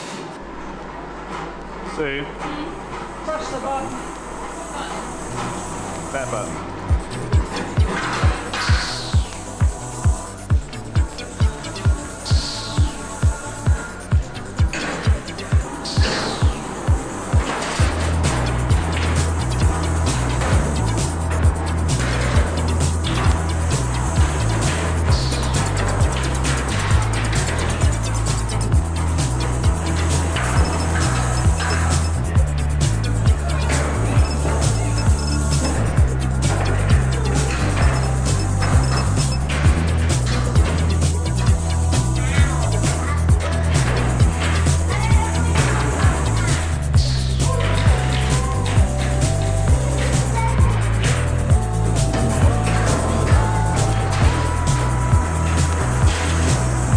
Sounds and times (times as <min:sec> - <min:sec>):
Music: 0:02.9 - 0:56.9.